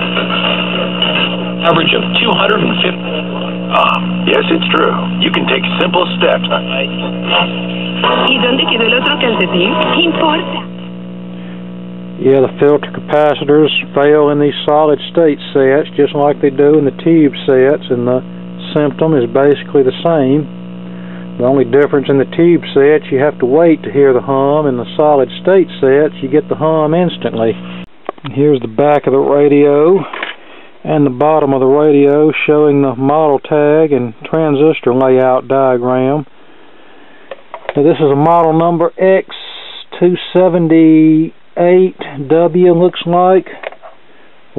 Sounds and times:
Radio: 0:00.0 - 0:36.3, 0:37.3 - 0:44.0
Speech: 0:01.6 - 0:07.5, 0:12.2 - 0:20.5, 0:21.4 - 0:27.6, 0:28.2 - 0:30.1, 0:30.8 - 0:36.3, 0:37.8 - 0:43.6.

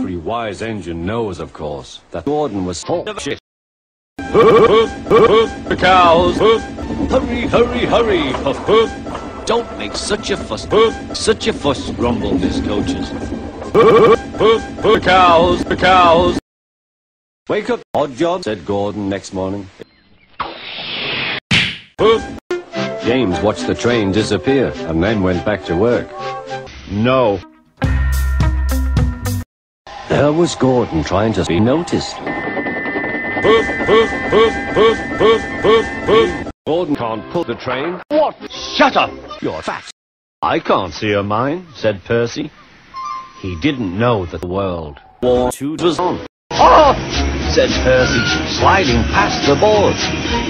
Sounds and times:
Speech: 0:00.0 - 0:03.4, 0:05.7 - 0:13.2, 0:14.4 - 0:16.4, 0:17.5 - 0:19.9, 0:23.0 - 0:26.1, 0:26.9 - 0:27.4, 0:30.1 - 0:32.3, 0:35.7 - 0:42.5, 0:43.4 - 0:50.0.

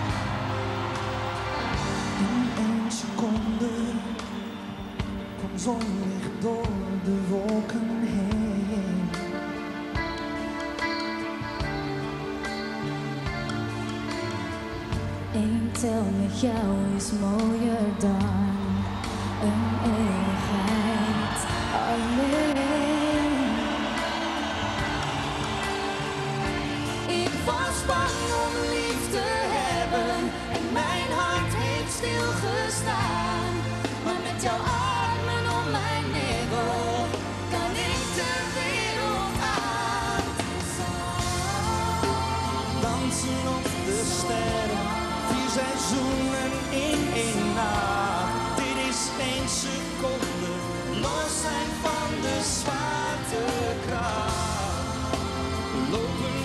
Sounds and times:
Music: 0:00.0 - 0:56.4.

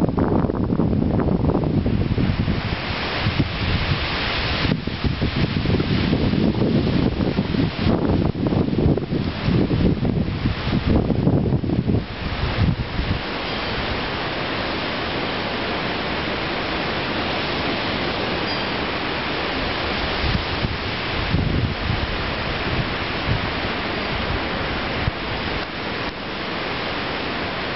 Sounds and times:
Wind noise (microphone): 0:00.0 - 0:14.8, 0:17.1 - 0:26.2.

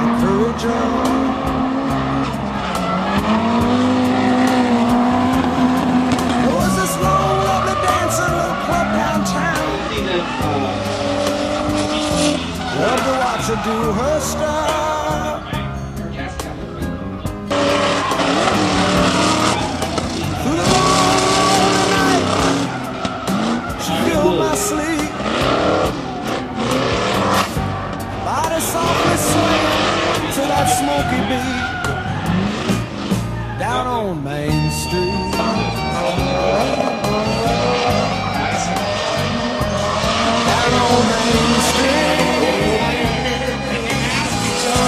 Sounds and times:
Music: 0:00.0 - 0:44.8
Race car, auto racing: 0:00.0 - 0:44.8
Skidding: 0:00.0 - 0:44.8.

